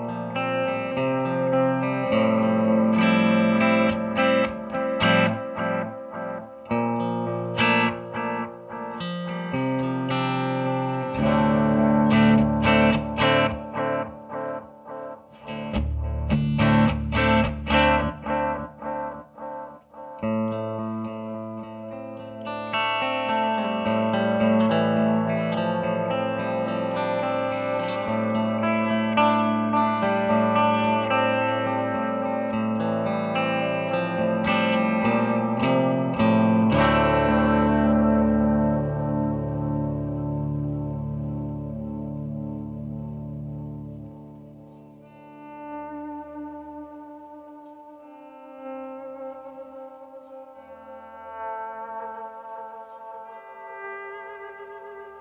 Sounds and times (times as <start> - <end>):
Guitar: 0.0 - 55.2.